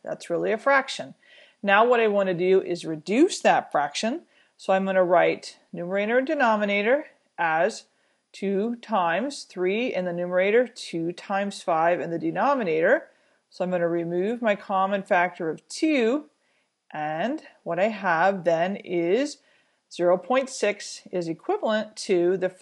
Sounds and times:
Speech: 0:00.0 - 0:16.3, 0:16.9 - 0:22.6.

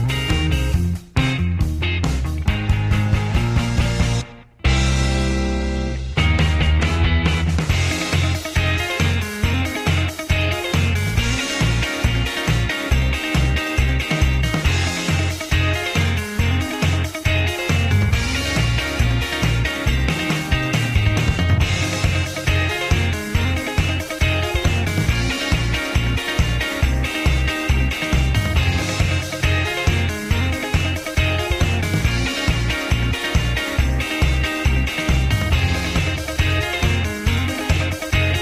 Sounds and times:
Music: 0:00.0 - 0:38.4.

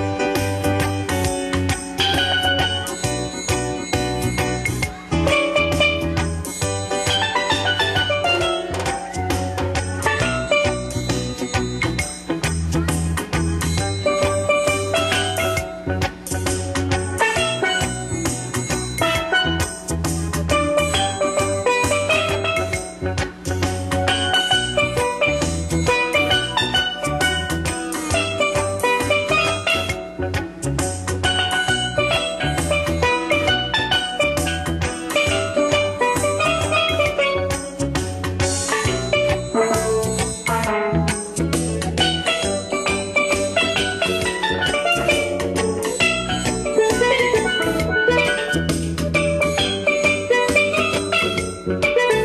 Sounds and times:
Drum: 0:00.0 - 0:52.2
Drum kit: 0:00.0 - 0:52.2.

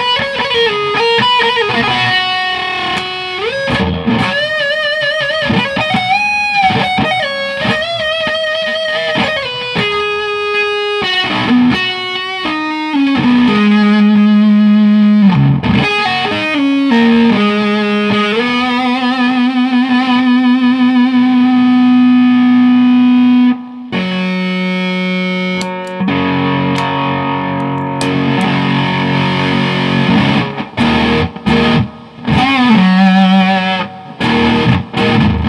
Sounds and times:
Distortion: 0:00.0 - 0:35.4
Guitar: 0:00.0 - 0:35.4.

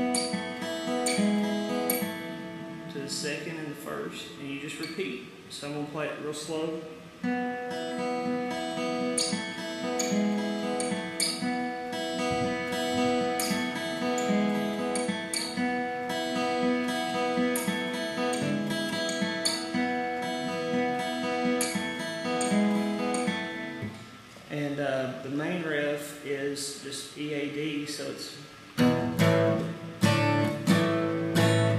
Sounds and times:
Guitar: 0:00.0 - 0:31.7.

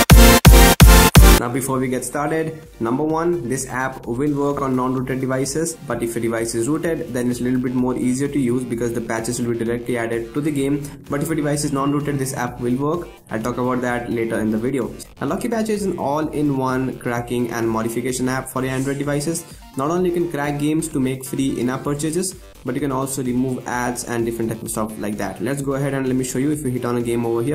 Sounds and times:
Music: 0:00.0 - 0:27.5
Speech: 0:01.4 - 0:27.5.

